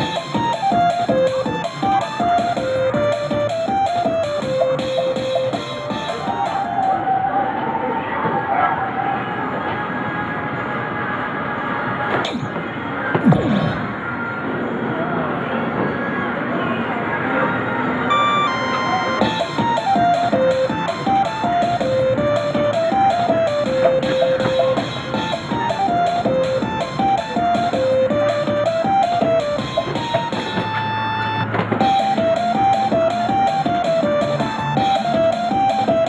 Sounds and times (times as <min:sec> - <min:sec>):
Music: 0:00.0 - 0:07.6, 0:09.6 - 0:14.9, 0:15.6 - 0:36.0.